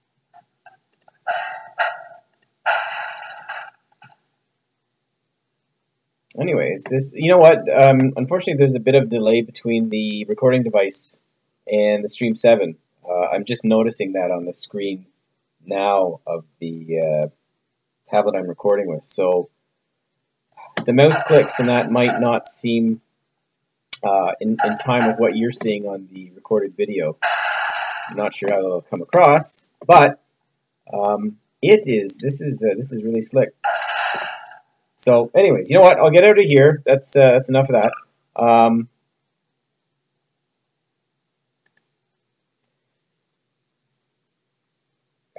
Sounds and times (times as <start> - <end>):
Speech: 6.3 - 15.0, 15.7 - 17.3, 18.1 - 19.5, 20.6 - 23.0, 24.0 - 27.2, 28.1 - 30.2, 30.9 - 33.5, 35.0 - 38.9.